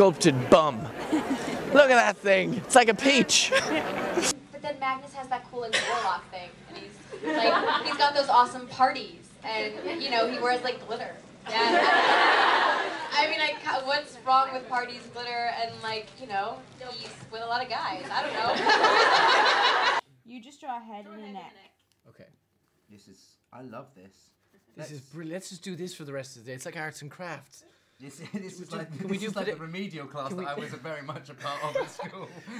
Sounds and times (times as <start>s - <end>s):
Laughter: 0.8s - 1.7s, 3.3s - 4.4s, 7.1s - 8.2s, 11.5s - 13.2s, 18.0s - 20.0s, 30.3s - 32.6s.